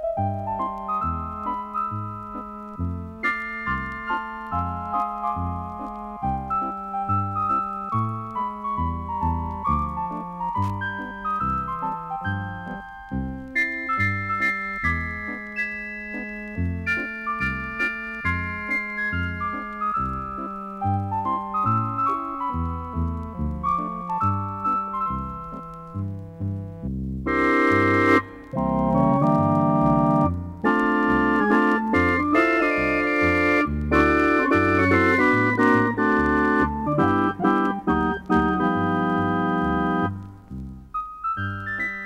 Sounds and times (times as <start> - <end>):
Music: 0.0 - 42.0.